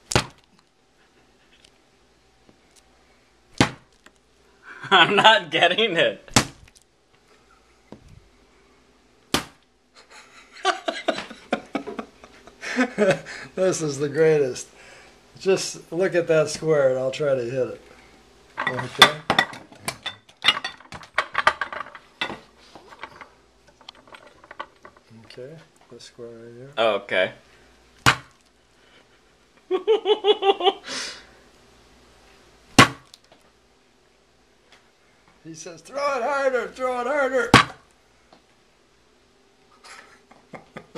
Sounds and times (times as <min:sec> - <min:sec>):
Speech: 0:05.1 - 0:06.3, 0:13.6 - 0:14.7, 0:15.4 - 0:17.8, 0:18.7 - 0:19.3, 0:25.1 - 0:27.4, 0:35.4 - 0:37.6.